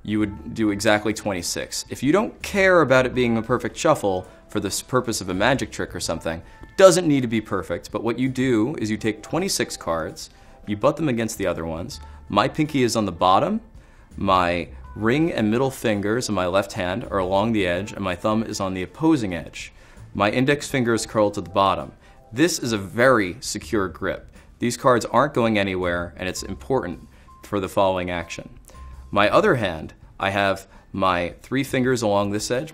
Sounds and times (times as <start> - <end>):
Speech: 0.0 - 13.6, 14.2 - 28.6, 29.2 - 32.7
Music: 0.0 - 32.7.